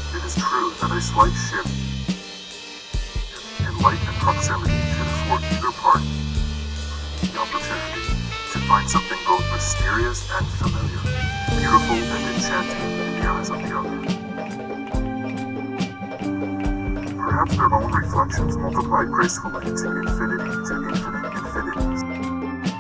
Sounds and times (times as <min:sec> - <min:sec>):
Speech: 0:00.0 - 0:01.8, 0:03.4 - 0:06.1, 0:07.3 - 0:14.1, 0:17.2 - 0:22.1
Music: 0:00.0 - 0:22.8.